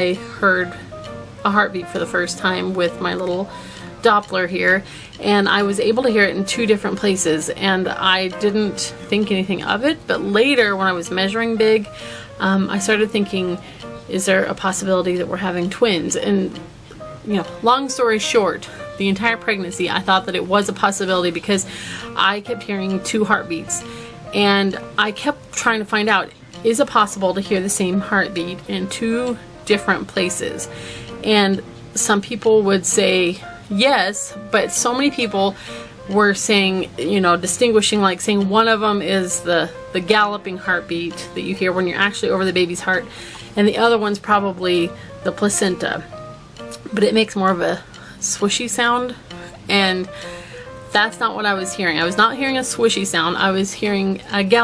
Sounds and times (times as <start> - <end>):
Speech: 0.0 - 0.8, 1.4 - 16.6, 17.2 - 46.1, 46.8 - 50.1, 50.9 - 54.6
Music: 0.0 - 54.6.